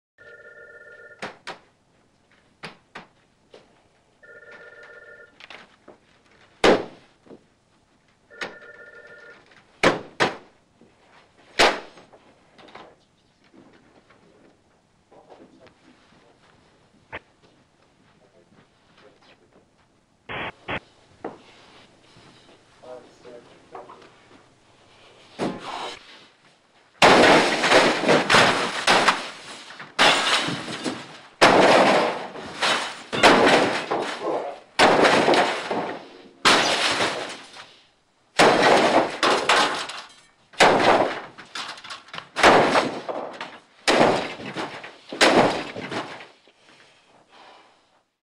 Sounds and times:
Smash, crash: 0:27.0 - 0:37.7, 0:38.4 - 0:46.3.

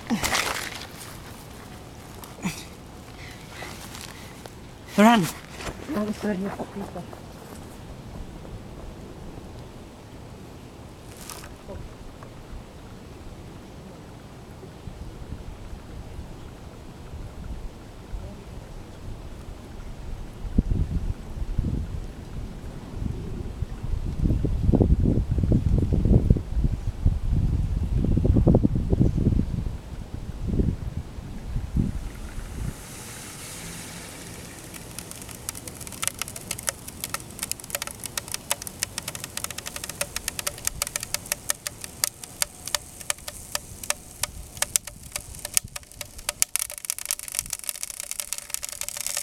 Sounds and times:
Eruption: 0:11.0 - 0:49.2.

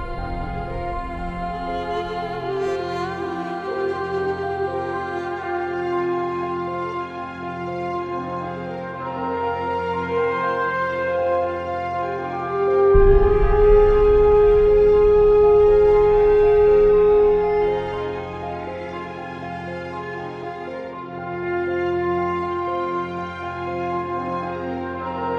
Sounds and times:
Sad music: 0:00.0 - 0:25.3.

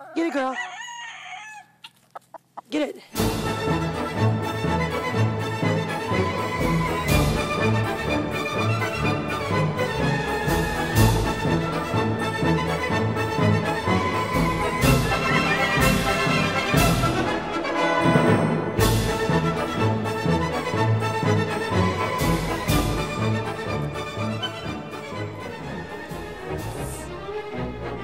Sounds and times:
Music: 0:03.2 - 0:28.0.

